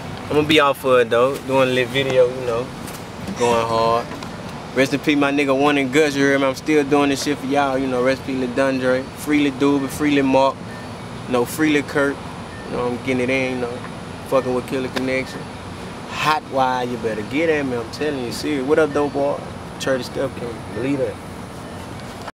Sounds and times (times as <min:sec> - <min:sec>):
Speech: 0:00.3 - 0:02.7, 0:03.4 - 0:04.1, 0:04.8 - 0:10.6, 0:11.3 - 0:15.4, 0:16.1 - 0:21.2.